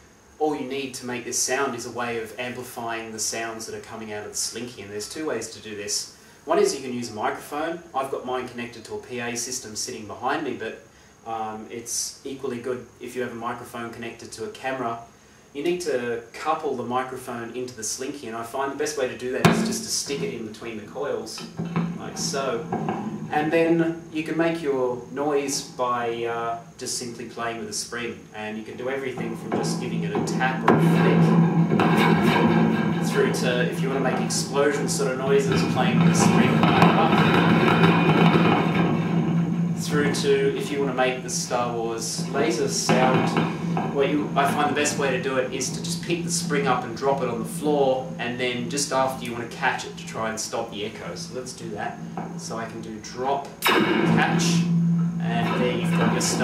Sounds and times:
Speech: 0.4 - 38.8, 39.8 - 56.4.

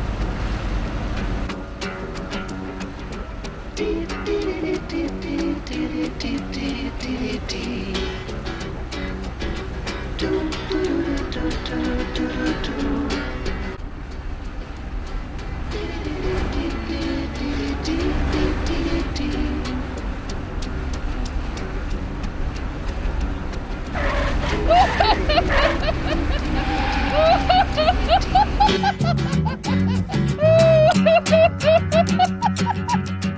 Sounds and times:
Car: 0.0 - 33.3
Music: 1.1 - 26.6, 27.3 - 33.3.

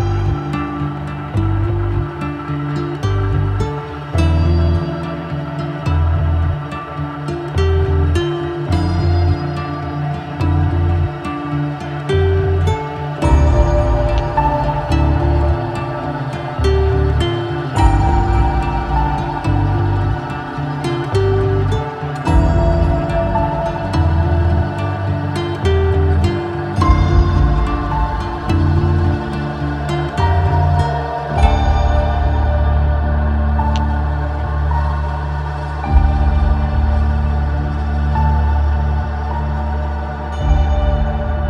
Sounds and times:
Soundtrack music: 0.0 - 41.5.

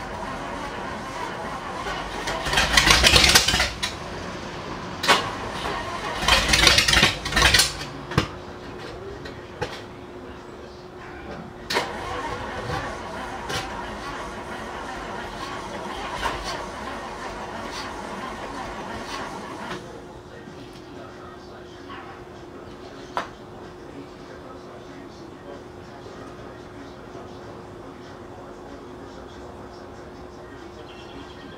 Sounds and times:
Speech: 8.4 - 11.7, 19.8 - 31.5.

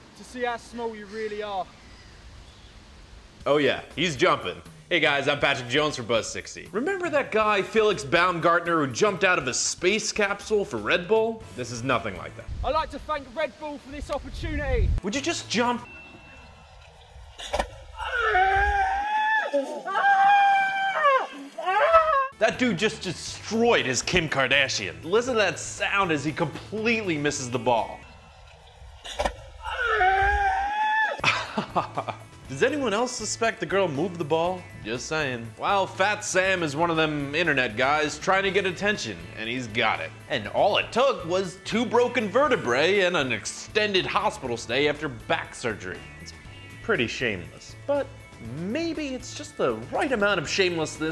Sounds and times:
Speech: 0.2 - 1.7, 3.5 - 15.9, 22.4 - 28.0, 32.5 - 46.0, 46.8 - 51.1
Music: 2.8 - 19.0, 21.3 - 30.6, 31.2 - 51.1.

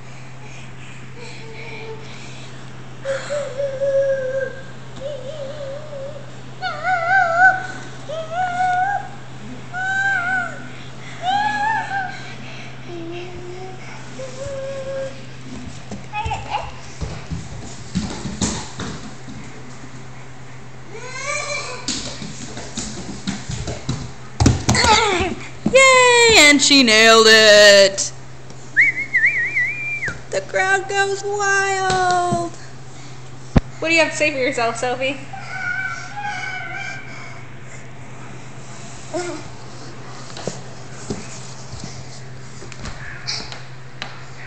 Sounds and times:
Speech: 30.3 - 32.6, 33.8 - 35.3.

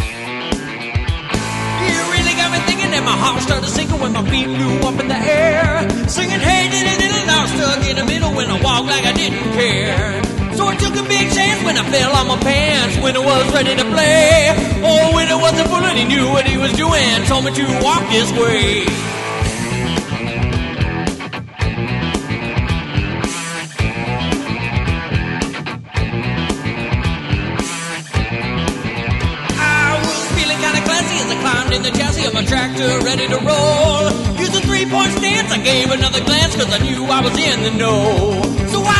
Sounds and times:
Music: 0.0 - 38.9.

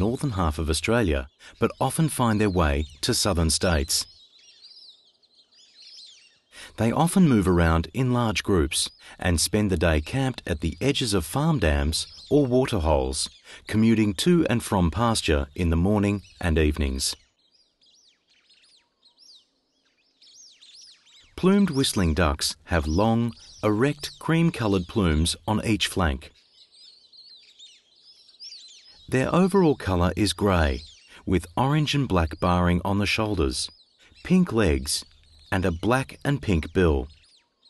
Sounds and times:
Speech: 0.0 - 4.1, 6.6 - 17.2, 21.4 - 26.3, 29.1 - 37.1
Bird vocalization, bird call, bird song: 0.0 - 37.6.

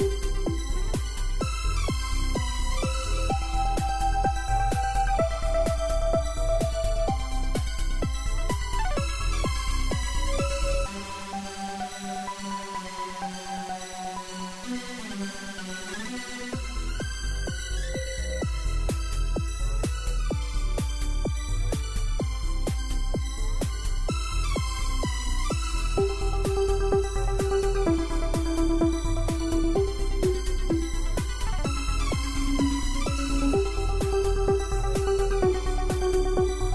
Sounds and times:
Exciting music: 0.0 - 12.9, 16.6 - 36.7
Soundtrack music: 0.0 - 36.7.

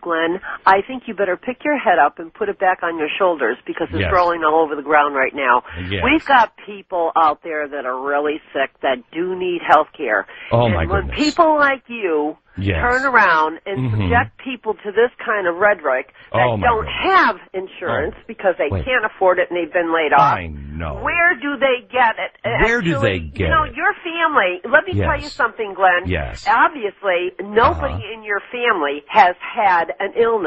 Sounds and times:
Speech: 0.0 - 30.4.

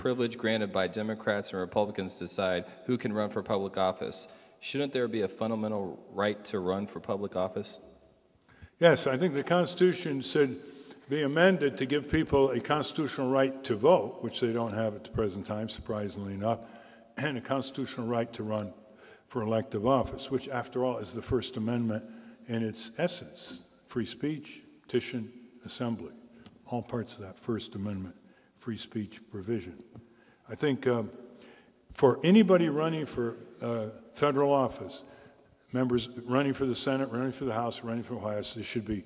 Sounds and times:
Speech: 0.0 - 7.8, 8.7 - 29.9, 30.5 - 31.1, 31.9 - 35.1, 35.7 - 39.0.

